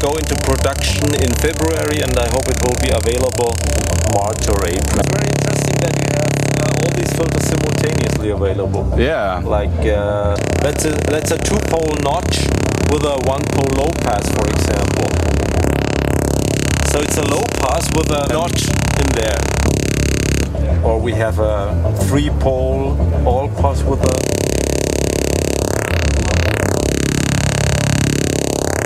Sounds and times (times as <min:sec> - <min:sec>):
Speech: 0:00.0 - 0:15.1, 0:16.9 - 0:19.4, 0:20.6 - 0:24.2
Synthesizer: 0:00.0 - 0:28.8.